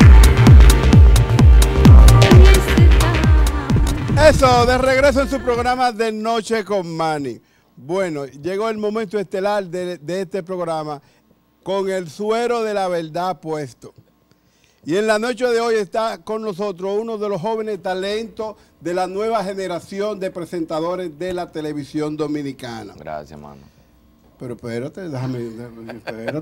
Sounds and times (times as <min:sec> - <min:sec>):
Speech: 0:04.2 - 0:11.0, 0:11.6 - 0:14.0, 0:14.9 - 0:23.7, 0:24.4 - 0:26.4.